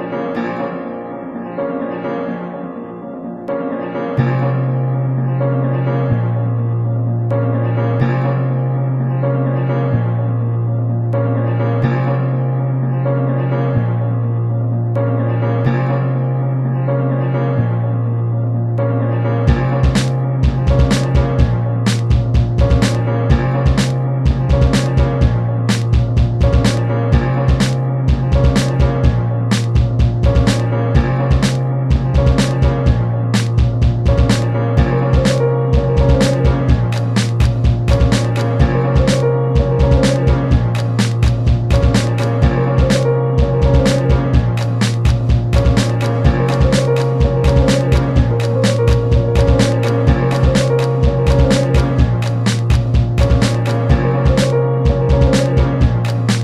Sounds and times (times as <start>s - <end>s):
Music: 0.0s - 56.4s.